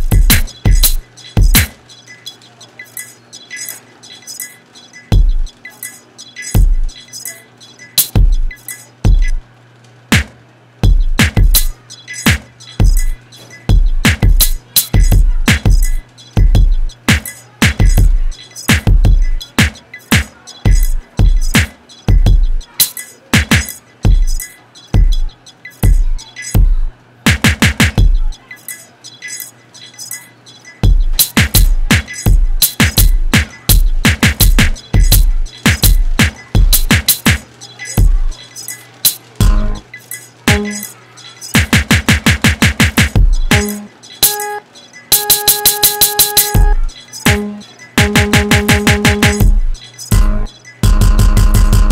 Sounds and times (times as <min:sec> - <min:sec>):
Drum machine: 0:00.0 - 0:51.9.